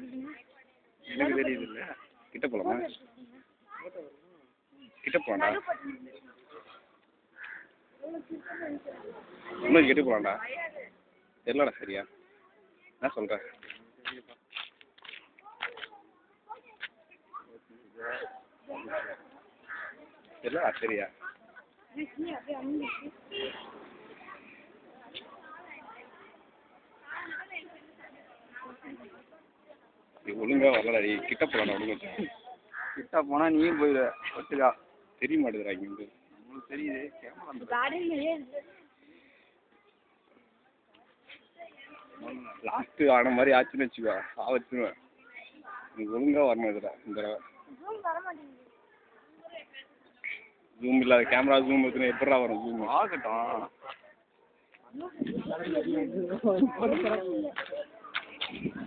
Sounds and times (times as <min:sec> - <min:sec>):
Outside, rural or natural: 0:00.0 - 0:58.8.